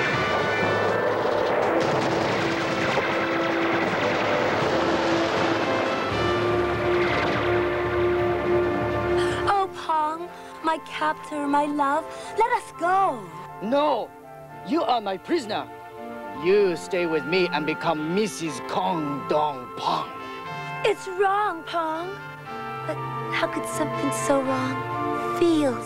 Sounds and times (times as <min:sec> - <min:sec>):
Music: 0:00.0 - 0:25.8.